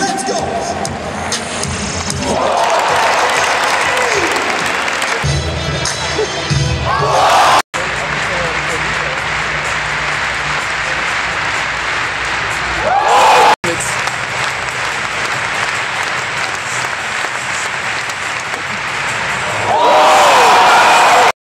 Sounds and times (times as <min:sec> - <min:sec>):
Music: 0:00.0 - 0:21.1
Speech: 0:13.6 - 0:14.0.